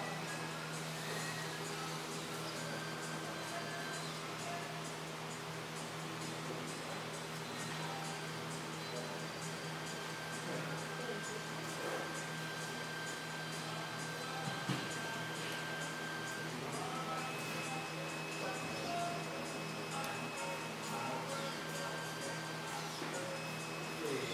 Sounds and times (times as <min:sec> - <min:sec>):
Music: 0:00.0 - 0:24.3.